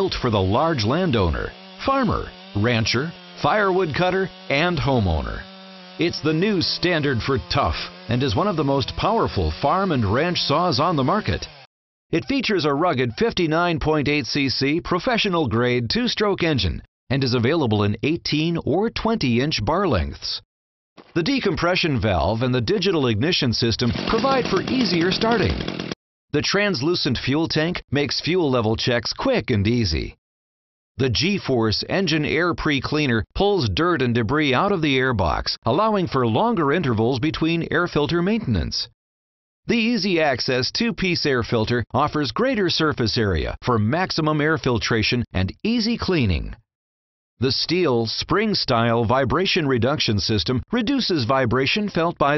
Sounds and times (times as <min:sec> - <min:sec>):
Speech: 0:00.0 - 0:05.4, 0:06.0 - 0:11.5, 0:12.2 - 0:20.4, 0:21.2 - 0:25.6, 0:26.4 - 0:30.2, 0:31.0 - 0:38.9, 0:39.7 - 0:46.6, 0:47.4 - 0:52.3.